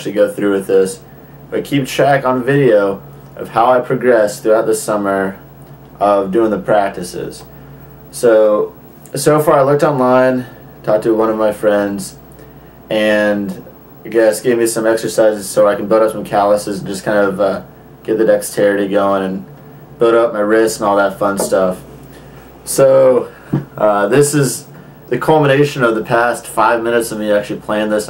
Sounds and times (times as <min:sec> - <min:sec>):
Speech: 0:00.0 - 0:07.5, 0:08.1 - 0:12.2, 0:12.9 - 0:21.9, 0:22.6 - 0:28.0.